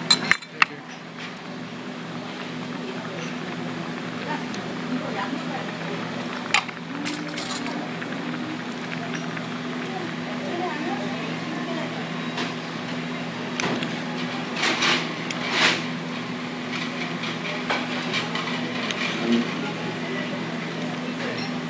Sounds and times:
Speech: 0.4s - 1.0s, 2.1s - 6.3s, 6.9s - 12.3s, 16.9s - 21.6s.

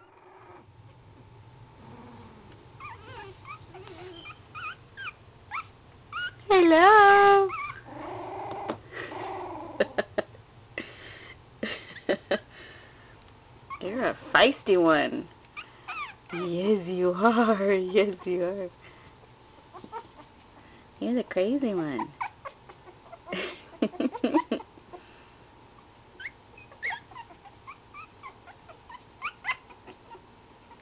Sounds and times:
Speech: 6.5s - 7.5s, 13.8s - 15.3s, 16.4s - 18.7s, 21.0s - 22.1s
Dog: 15.6s - 16.6s.

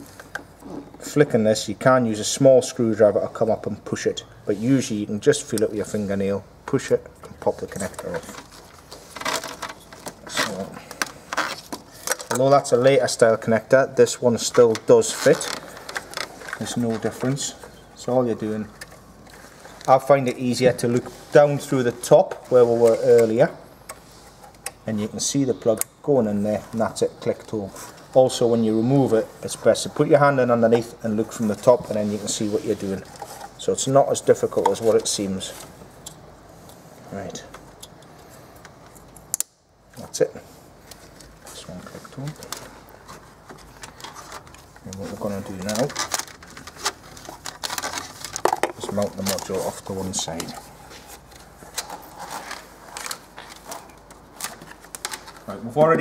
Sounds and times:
Speech: 1.0s - 8.4s, 10.3s - 10.9s, 12.3s - 15.6s, 16.6s - 18.8s, 19.9s - 23.6s, 24.8s - 35.6s, 37.1s - 37.6s, 40.0s - 40.5s, 41.5s - 42.5s, 44.8s - 46.1s, 48.8s - 50.6s, 55.5s - 56.0s.

